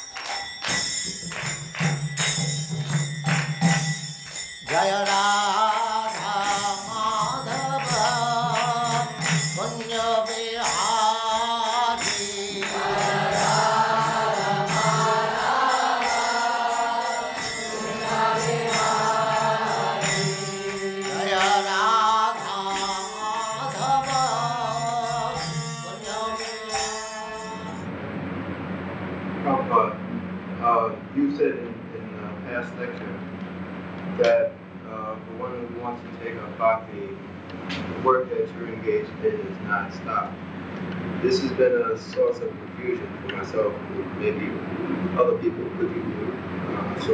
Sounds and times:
Speech: 29.4 - 30.0, 30.6 - 33.2, 34.2 - 37.2, 38.0 - 40.3, 41.2 - 44.6, 45.2 - 47.1.

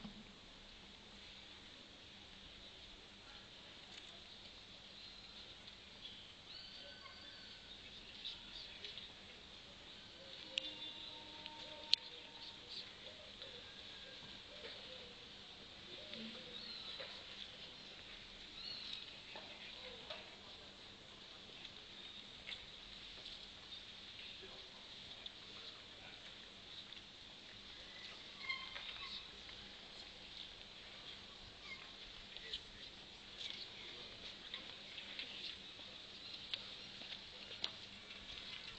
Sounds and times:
Speech: 6.7 - 22.2, 24.2 - 26.5.

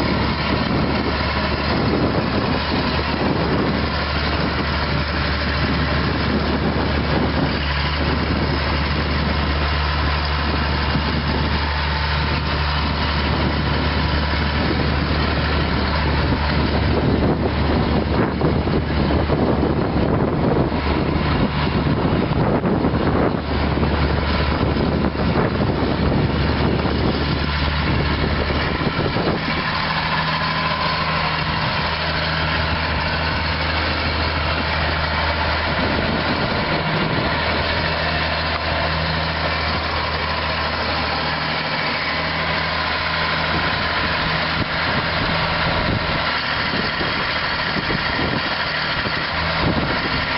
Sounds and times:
Vehicle: 0.0 - 50.3.

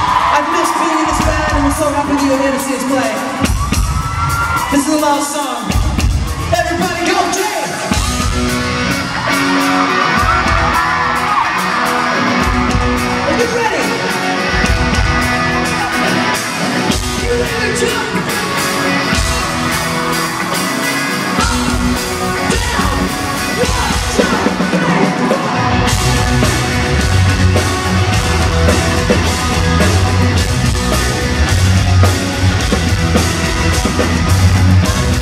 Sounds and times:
Music: 0.0 - 35.2
Speech: 0.3 - 3.4, 4.7 - 5.8, 6.5 - 7.9, 13.3 - 14.0, 17.2 - 18.2.

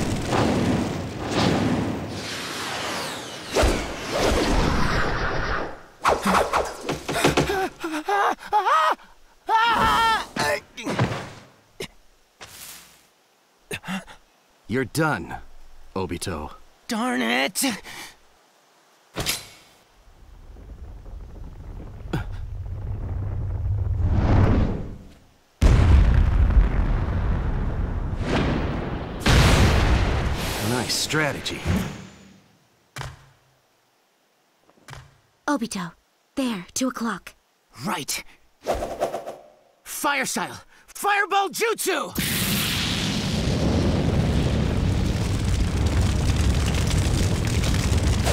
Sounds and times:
Speech: 16.0 - 17.8, 39.9 - 42.2.

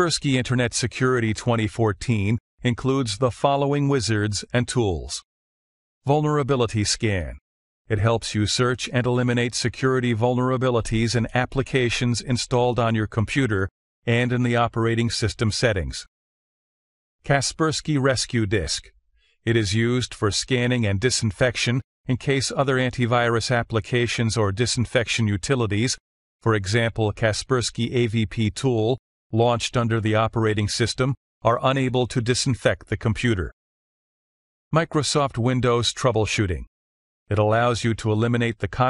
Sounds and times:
Speech: 0.0 - 5.3, 6.0 - 16.1, 17.2 - 18.9, 19.5 - 33.6, 34.8 - 36.7, 37.3 - 38.9.

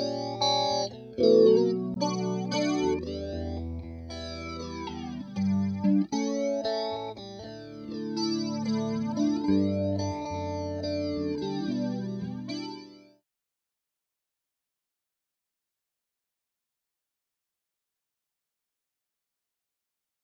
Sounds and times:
Effects unit: 0.0 - 13.2
Guitar: 0.0 - 13.2.

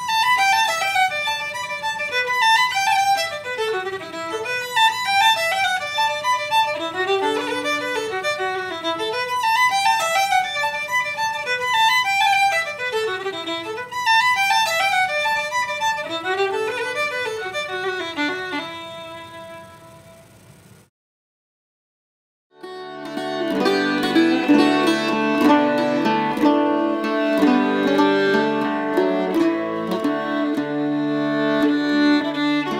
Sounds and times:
Violin, fiddle: 0.0 - 20.1, 22.6 - 32.7.

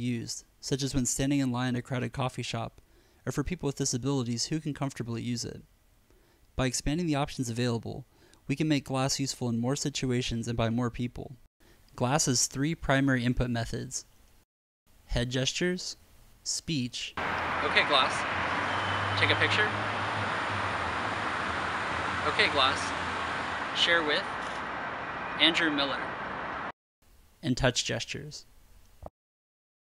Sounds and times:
Speech: 0.0 - 5.7, 6.6 - 11.4, 12.0 - 14.1, 15.1 - 18.2, 19.2 - 19.8, 22.2 - 23.0, 23.8 - 24.3, 25.4 - 26.1, 27.4 - 28.5.

